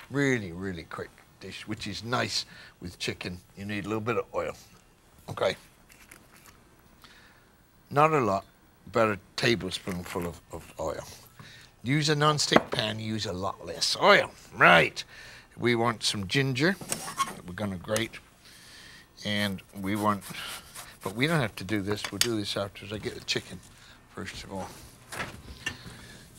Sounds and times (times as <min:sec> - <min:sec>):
Speech: 0:00.0 - 0:05.7, 0:07.9 - 0:11.2, 0:11.8 - 0:18.2, 0:19.2 - 0:20.4, 0:21.0 - 0:24.8.